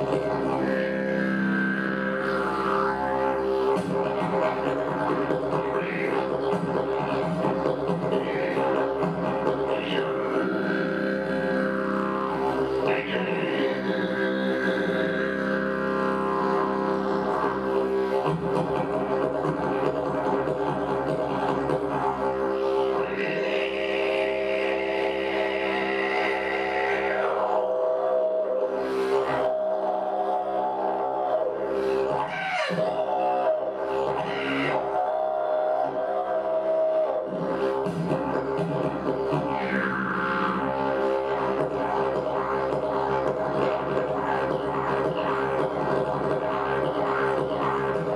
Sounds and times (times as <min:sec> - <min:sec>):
Didgeridoo: 0:00.0 - 0:48.1.